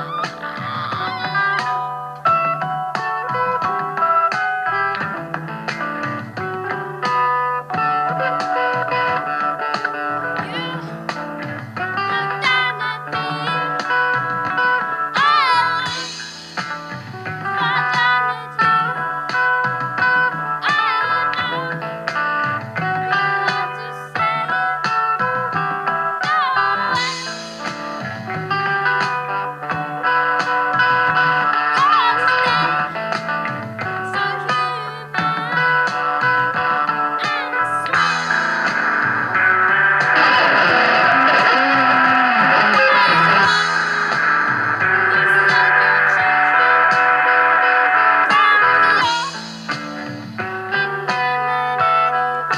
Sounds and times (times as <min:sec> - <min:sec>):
Music: 0:00.0 - 0:52.5.